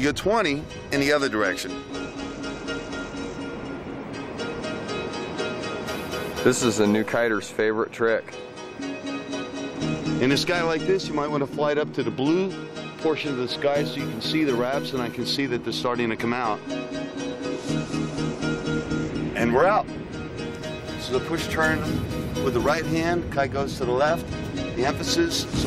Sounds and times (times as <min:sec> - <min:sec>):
Music: 0:00.0 - 0:25.6
Speech: 0:06.5 - 0:08.3, 0:10.2 - 0:16.6, 0:21.0 - 0:24.2, 0:24.8 - 0:25.6.